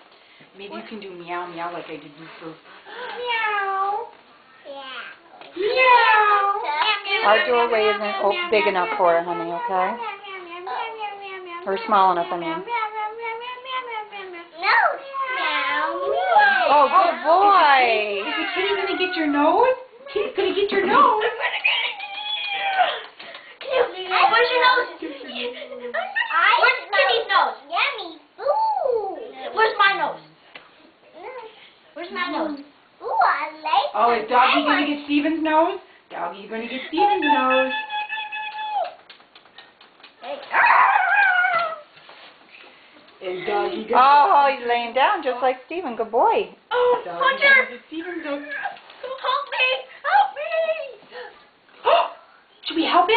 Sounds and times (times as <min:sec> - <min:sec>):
Inside, small room: 0:00.0 - 0:53.1
Child speech, kid speaking: 0:03.0 - 0:19.0, 0:23.6 - 0:30.4, 0:31.0 - 0:35.1, 0:40.2 - 0:41.9, 0:47.0 - 0:51.3.